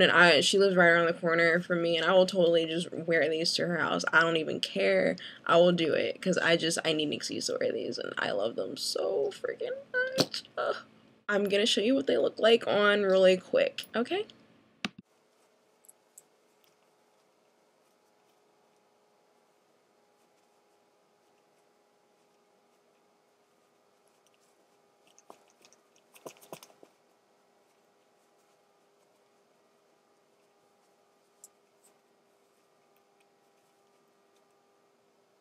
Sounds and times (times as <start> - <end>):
Inside, small room: 0.0 - 35.4.